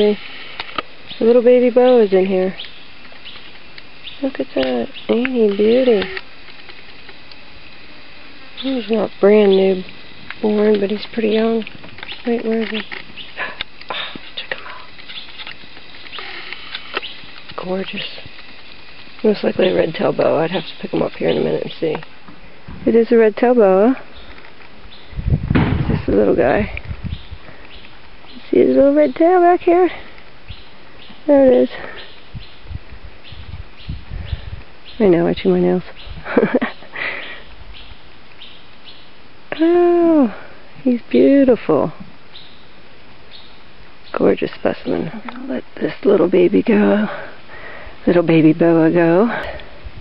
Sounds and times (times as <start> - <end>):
Outside, urban or manmade: 0.0 - 50.0
Speech: 4.2 - 6.2, 19.2 - 22.0, 28.4 - 30.0, 39.6 - 42.0, 44.2 - 47.2, 48.1 - 49.4.